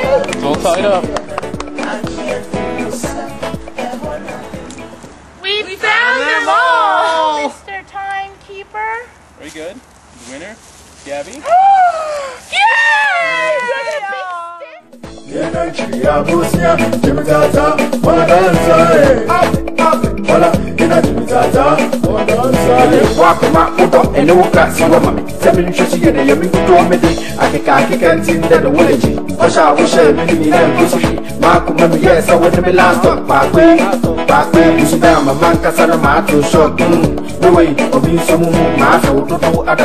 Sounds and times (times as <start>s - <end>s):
Afrobeat: 0.0s - 5.4s, 14.8s - 39.8s
Reggae: 0.0s - 5.4s, 14.8s - 39.8s.